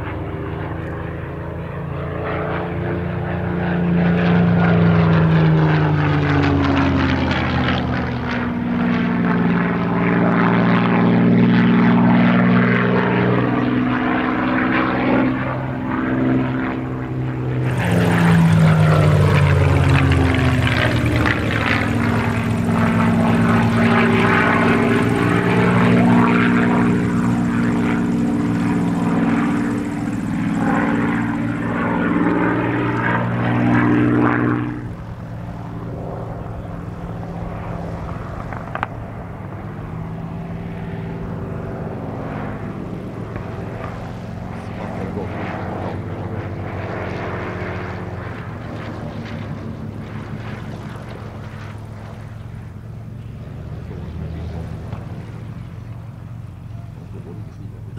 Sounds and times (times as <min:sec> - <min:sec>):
Fixed-wing aircraft, airplane: 0:00.0 - 0:57.9.